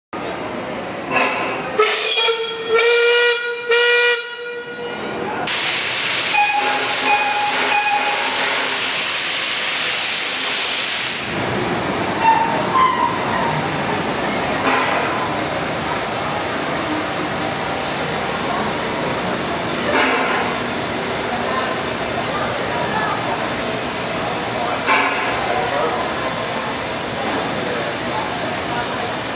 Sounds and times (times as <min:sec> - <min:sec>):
Railroad car, train wagon: 0:00.2 - 0:29.3
Train: 0:00.2 - 0:29.3
Steam whistle: 0:01.8 - 0:09.2, 0:12.2 - 0:13.3.